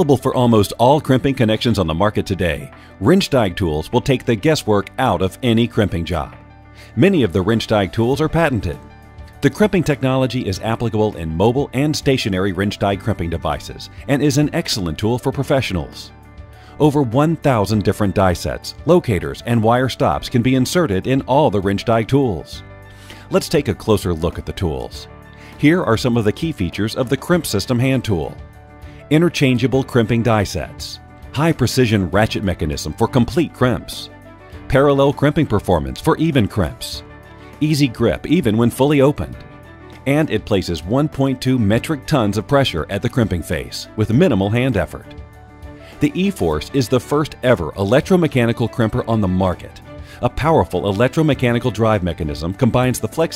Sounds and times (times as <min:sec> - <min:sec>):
Speech: 0:00.0 - 0:08.8, 0:09.4 - 0:16.1, 0:16.8 - 0:22.6, 0:23.3 - 0:28.4, 0:29.1 - 0:34.1, 0:34.7 - 0:37.0, 0:37.6 - 0:39.4, 0:40.0 - 0:45.2, 0:46.0 - 0:53.3
Music: 0:00.0 - 0:53.3.